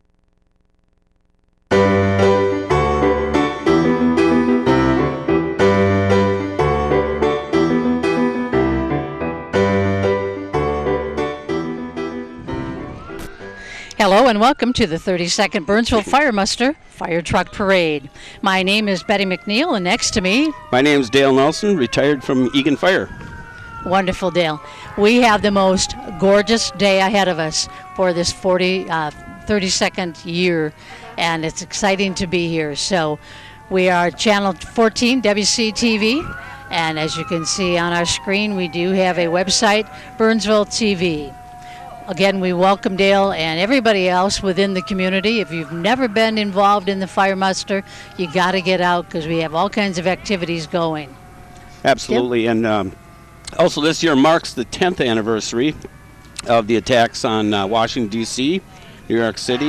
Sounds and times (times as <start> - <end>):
Fire engine, fire truck (siren): 1.9 - 59.6
Speech: 14.0 - 23.1, 23.9 - 33.1, 42.1 - 51.1, 51.9 - 52.9, 53.6 - 59.6.